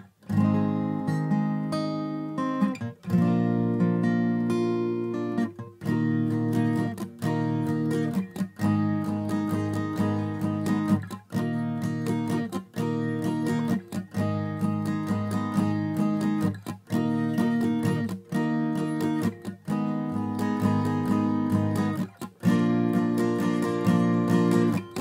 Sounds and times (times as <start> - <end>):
Acoustic guitar: 0.0 - 25.0.